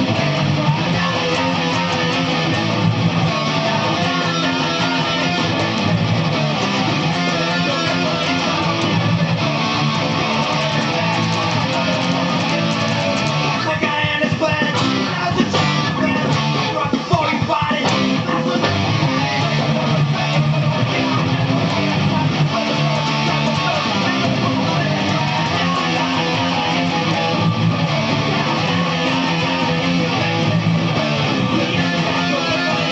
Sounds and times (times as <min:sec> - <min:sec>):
Guitar: 0:00.0 - 0:32.9.